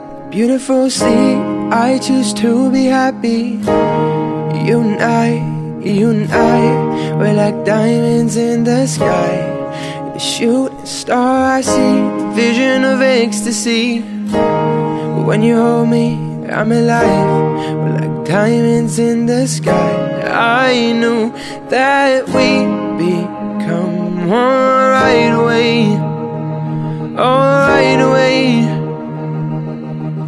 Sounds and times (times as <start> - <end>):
Music: 0.0 - 30.2.